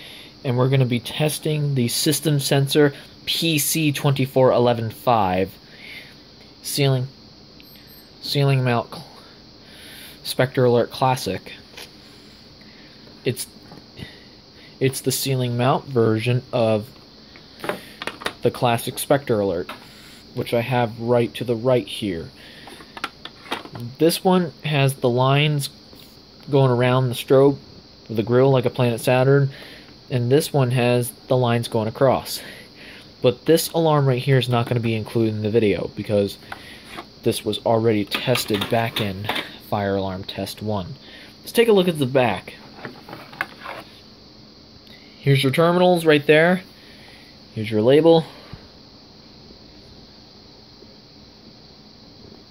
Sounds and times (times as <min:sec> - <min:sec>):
Speech: 0:00.4 - 0:05.6, 0:06.6 - 0:07.2, 0:08.2 - 0:09.3, 0:10.2 - 0:11.6, 0:13.2 - 0:13.6, 0:14.8 - 0:17.0, 0:18.4 - 0:19.8, 0:20.4 - 0:22.4, 0:23.8 - 0:25.8, 0:26.5 - 0:29.5, 0:30.1 - 0:32.6, 0:33.2 - 0:36.4, 0:37.2 - 0:42.6, 0:45.2 - 0:46.7, 0:47.6 - 0:48.4.